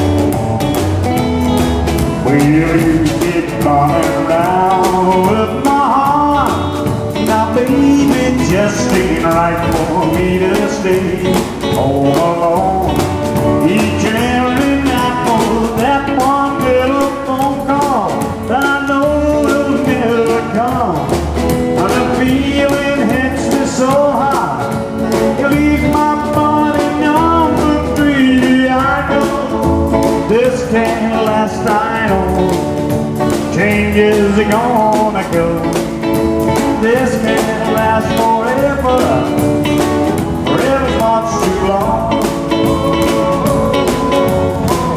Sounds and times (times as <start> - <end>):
Music: 0.0 - 44.9.